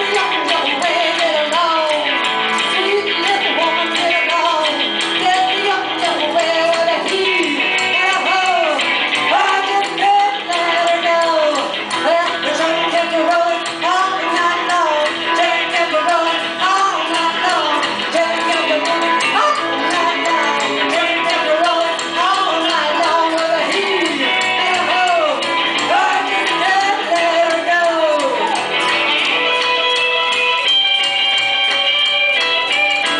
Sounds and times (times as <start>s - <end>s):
Music: 0.0s - 33.1s.